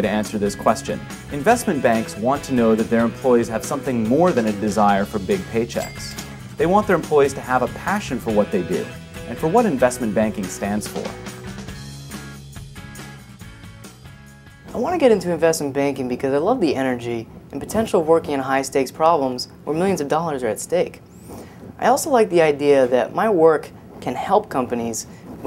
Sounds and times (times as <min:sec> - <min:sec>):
Speech: 0:00.0 - 0:11.1, 0:14.7 - 0:21.0, 0:21.8 - 0:25.4
Music: 0:00.0 - 0:15.2.